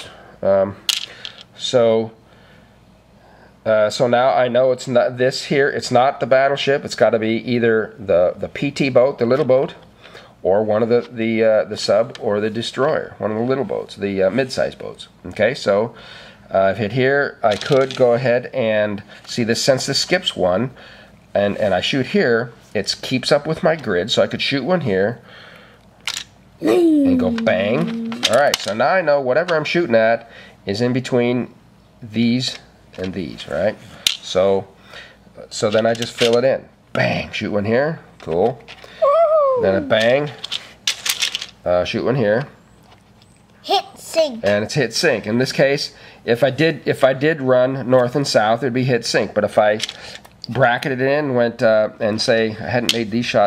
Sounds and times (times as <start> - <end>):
Speech: 26.6 - 34.7, 44.4 - 49.8, 50.5 - 53.4.